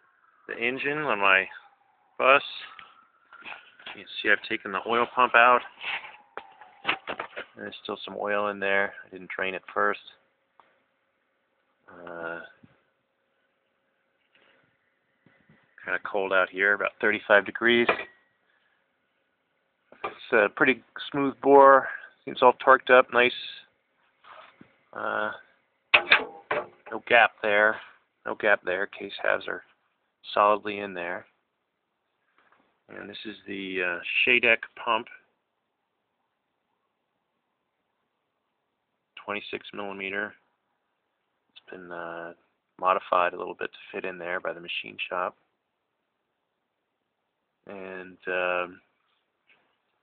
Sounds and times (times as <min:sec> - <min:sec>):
Speech: 0:00.5 - 0:01.6, 0:02.2 - 0:02.8, 0:03.9 - 0:05.7, 0:07.6 - 0:10.2, 0:11.9 - 0:12.6, 0:15.8 - 0:18.0, 0:20.1 - 0:23.7, 0:25.0 - 0:25.4, 0:26.9 - 0:31.3, 0:32.9 - 0:35.2, 0:39.2 - 0:40.4, 0:41.6 - 0:45.4, 0:47.7 - 0:48.8.